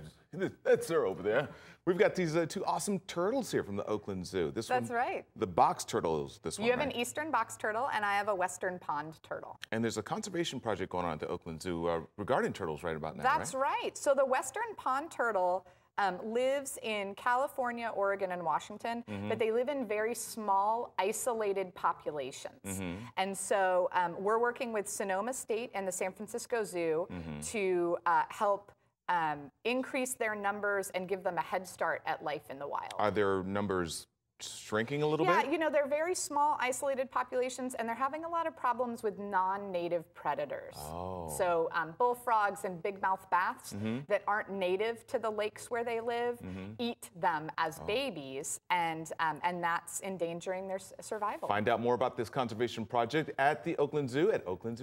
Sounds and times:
Speech: 0.0s - 7.3s, 9.7s - 13.9s, 19.1s - 19.6s, 22.6s - 23.1s, 27.1s - 28.2s, 32.9s - 35.8s, 40.8s - 42.6s, 43.7s - 44.4s, 45.8s - 48.5s, 51.2s - 54.8s.

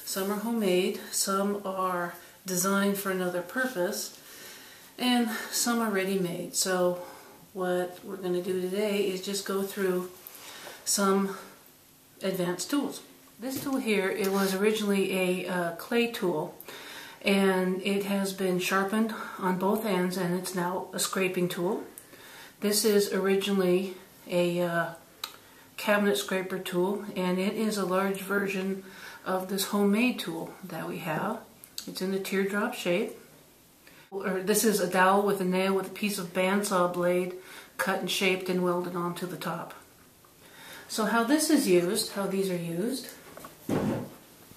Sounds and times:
Speech: 0.0s - 4.2s, 5.0s - 10.2s, 10.9s - 11.6s, 12.2s - 16.6s, 17.2s - 22.0s, 22.6s - 25.1s, 25.8s - 33.2s, 34.2s - 39.9s, 40.9s - 43.2s.

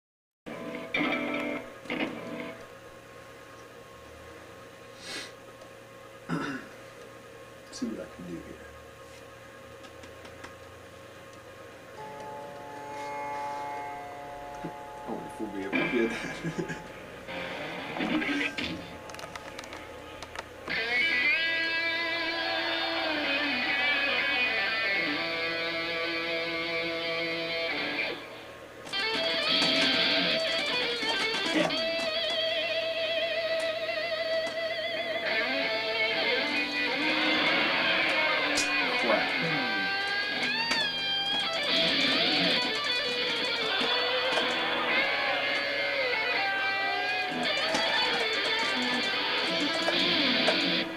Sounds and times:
Electric guitar: 0.5s - 2.7s, 12.0s - 50.9s.

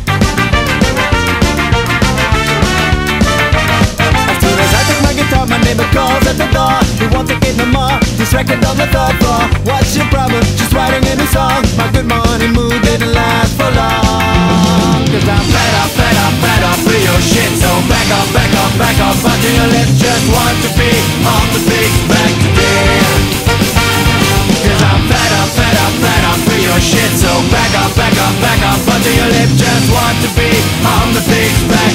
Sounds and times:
Music: 0.0s - 31.9s.

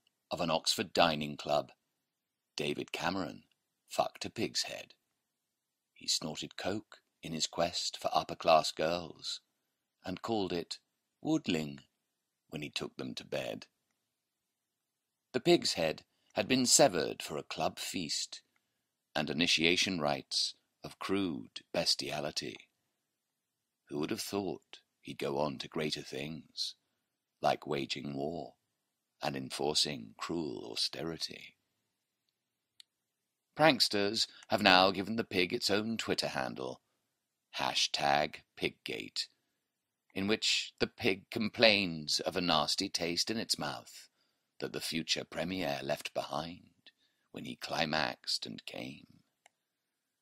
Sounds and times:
Speech: 0.3s - 1.8s, 2.6s - 5.0s, 6.0s - 11.9s, 12.5s - 13.7s, 15.4s - 18.5s, 19.2s - 22.7s, 23.9s - 26.8s, 27.4s - 28.6s, 29.2s - 31.6s, 33.6s - 36.8s, 37.5s - 39.4s, 40.1s - 46.7s, 47.4s - 49.2s.

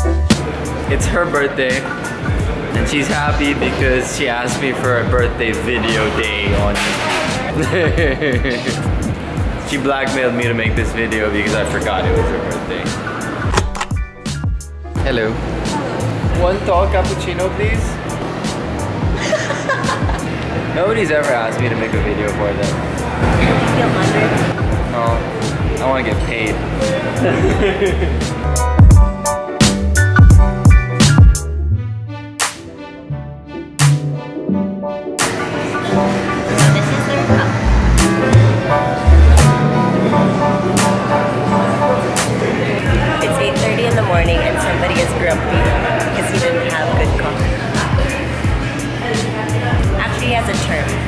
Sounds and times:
Music: 0.0s - 51.0s.

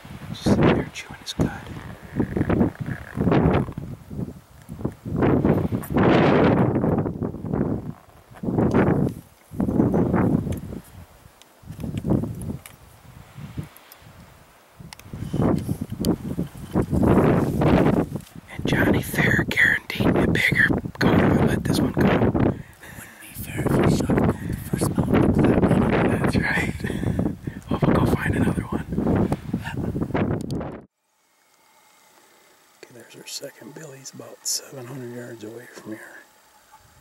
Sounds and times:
Outside, rural or natural: 0.0s - 37.0s.

